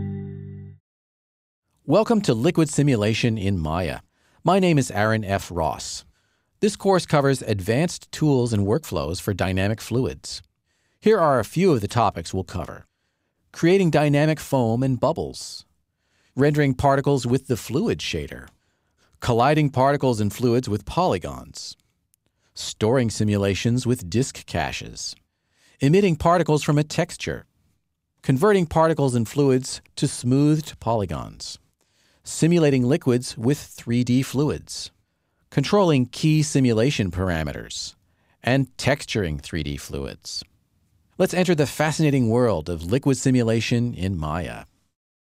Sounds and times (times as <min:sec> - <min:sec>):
Speech: 0:01.8 - 0:12.9, 0:13.5 - 0:15.7, 0:16.4 - 0:18.6, 0:19.2 - 0:21.8, 0:22.6 - 0:25.2, 0:25.8 - 0:27.5, 0:28.2 - 0:40.5, 0:41.2 - 0:44.8.